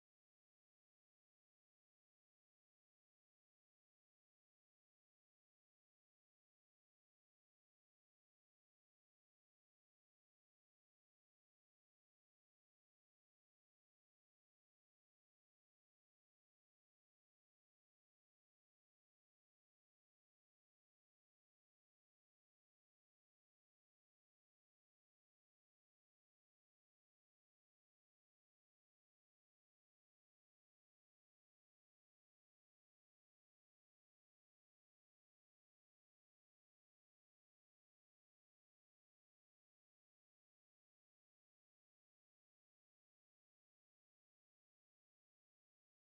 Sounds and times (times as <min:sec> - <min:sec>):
Silence: 0:00.0 - 0:46.1.